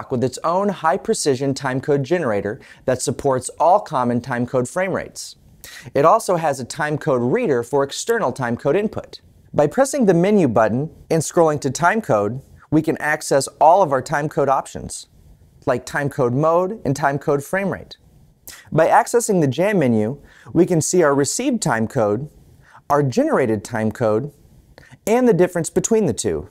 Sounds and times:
Speech: 0:00.0 - 0:24.4, 0:25.0 - 0:26.5.

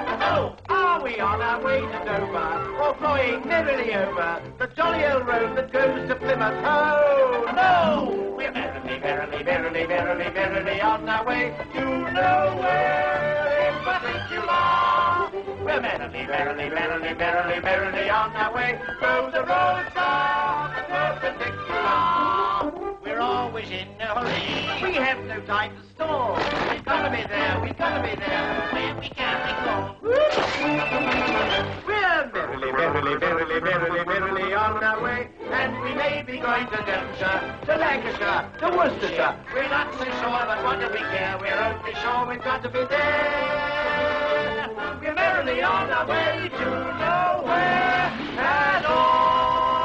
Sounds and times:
Music: 0:00.0 - 0:49.8.

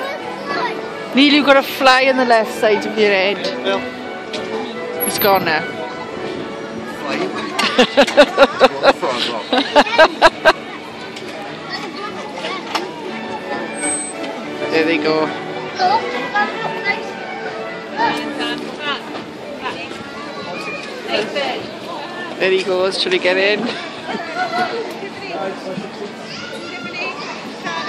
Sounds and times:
Music: 0:00.0 - 0:09.5, 0:10.2 - 0:22.4.

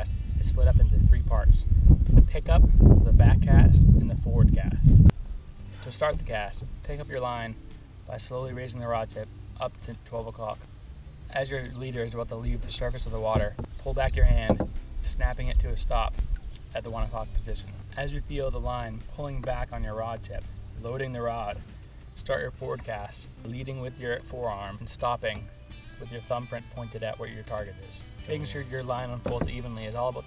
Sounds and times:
Speech: 0:00.0 - 0:01.7, 0:02.3 - 0:04.8, 0:05.8 - 0:10.7, 0:11.3 - 0:21.6, 0:22.2 - 0:30.2
Music: 0:00.0 - 0:30.2.

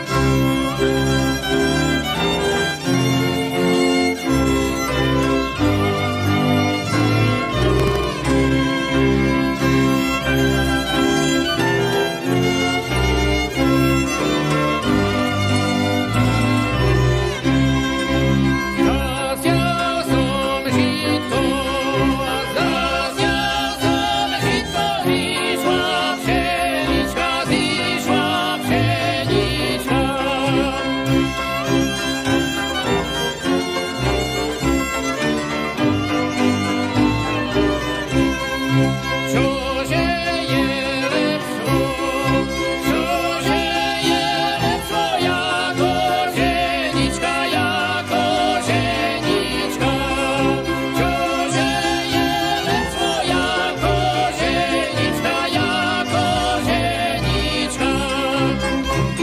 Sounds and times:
Folk music: 0:00.0 - 0:59.2.

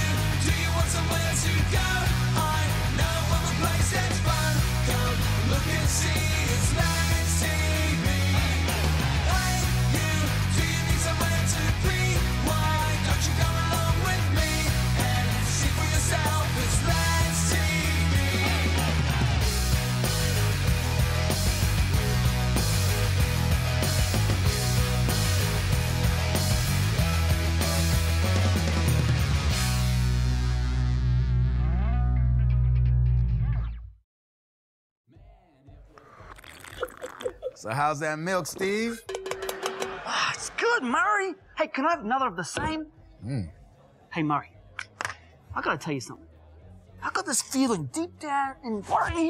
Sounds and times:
Music: 0:00.0 - 0:34.0, 0:39.0 - 0:41.4, 0:42.8 - 0:49.2
Speech: 0:37.6 - 0:39.0.

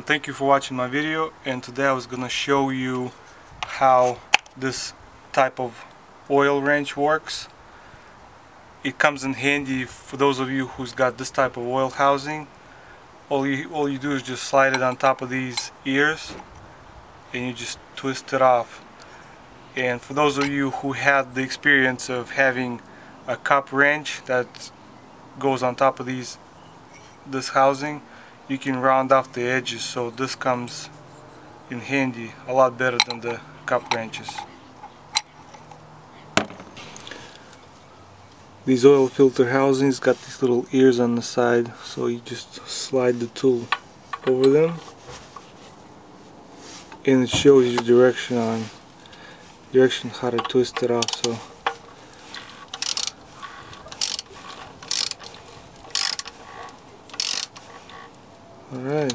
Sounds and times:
Speech: 0:00.0 - 0:07.5, 0:08.8 - 0:12.5, 0:13.3 - 0:16.4, 0:17.3 - 0:18.8, 0:19.8 - 0:24.7, 0:25.4 - 0:26.4, 0:27.3 - 0:30.9, 0:31.7 - 0:34.5, 0:38.6 - 0:44.9, 0:47.0 - 0:48.8, 0:49.7 - 0:51.5, 0:58.7 - 0:59.1.

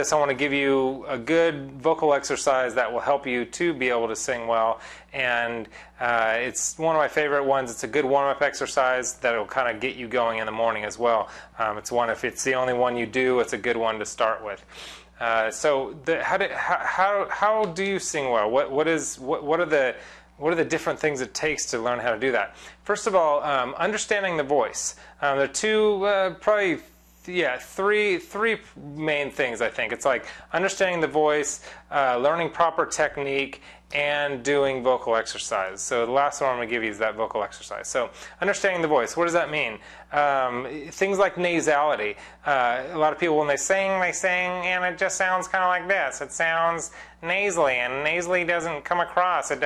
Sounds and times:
Speech: 0:00.0 - 0:49.6.

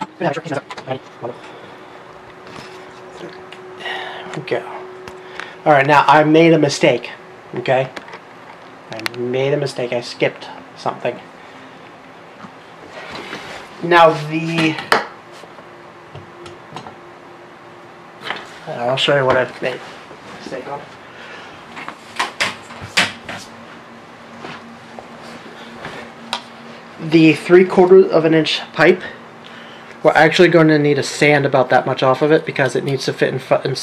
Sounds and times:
Speech: 0:00.0 - 0:01.4, 0:04.3 - 0:04.9, 0:05.6 - 0:08.0, 0:08.9 - 0:11.3, 0:13.8 - 0:14.9, 0:18.7 - 0:20.9, 0:27.0 - 0:29.2, 0:30.0 - 0:33.8.

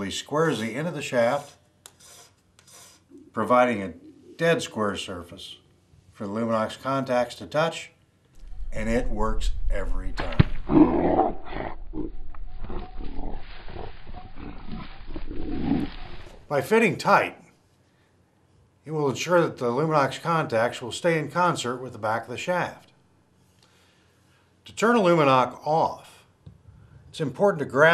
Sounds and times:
Speech: 0:00.0 - 0:01.6, 0:03.2 - 0:05.6, 0:06.2 - 0:08.0, 0:08.8 - 0:10.5, 0:16.5 - 0:17.5, 0:18.8 - 0:22.9, 0:24.7 - 0:26.3, 0:27.1 - 0:27.9
Roar: 0:10.7 - 0:16.5.

